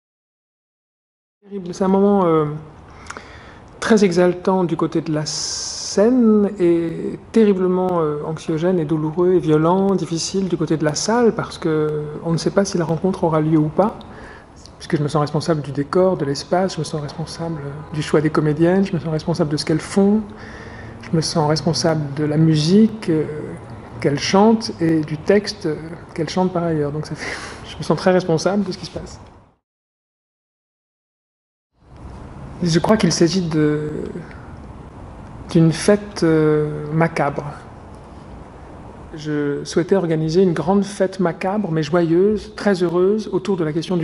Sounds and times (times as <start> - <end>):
Speech: 1.5 - 2.7, 3.8 - 20.4, 21.0 - 29.2, 32.6 - 34.5, 35.5 - 37.7, 39.1 - 44.0.